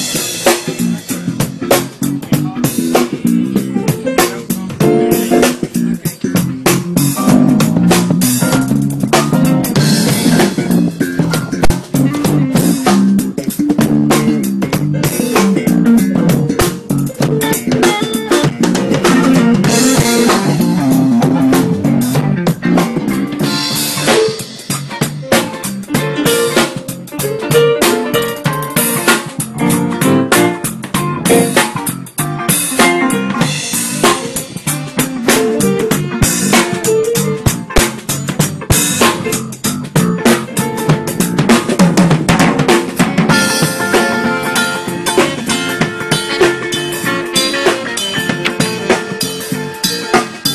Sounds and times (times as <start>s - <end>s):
Funk: 0.0s - 50.5s.